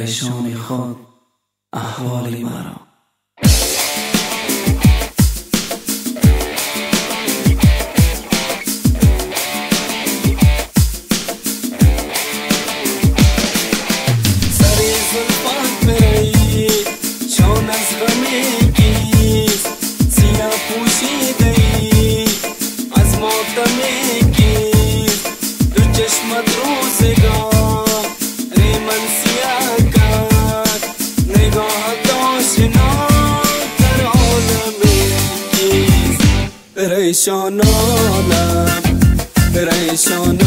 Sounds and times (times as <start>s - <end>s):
Soundtrack music: 11.8s - 22.2s, 28.6s - 36.7s, 37.6s - 40.4s
Jazz: 13.4s - 16.7s, 32.6s - 36.5s, 37.6s - 40.4s.